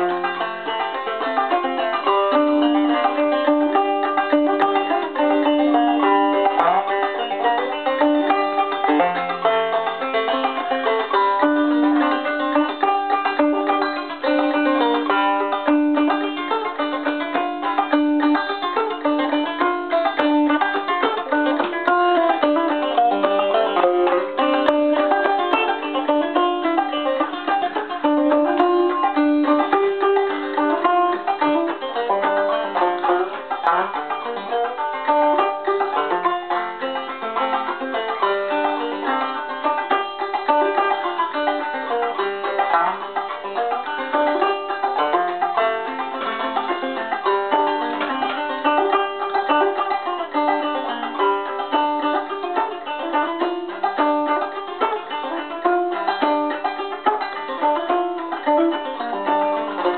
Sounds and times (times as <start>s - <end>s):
Banjo: 0.0s - 59.9s
Bluegrass: 0.0s - 59.9s.